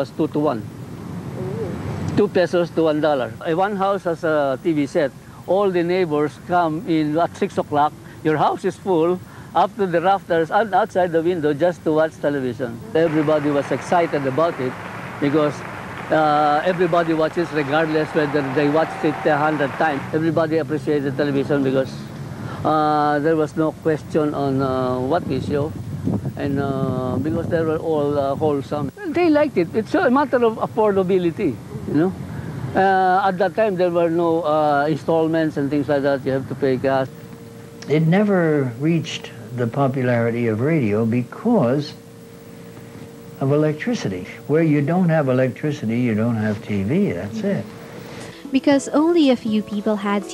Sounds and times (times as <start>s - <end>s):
Speech: 2.1s - 22.0s, 22.7s - 25.7s, 26.4s - 32.2s, 32.8s - 37.1s, 37.8s - 42.0s, 43.4s - 47.7s.